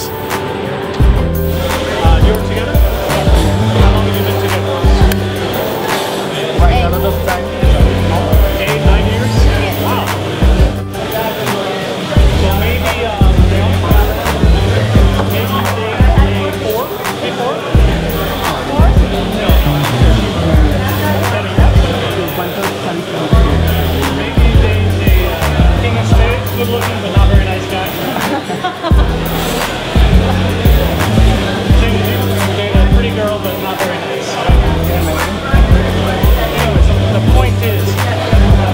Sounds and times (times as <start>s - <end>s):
Inside, large room or hall: 0.0s - 38.7s
Music: 0.0s - 38.7s
Speech: 1.7s - 38.7s.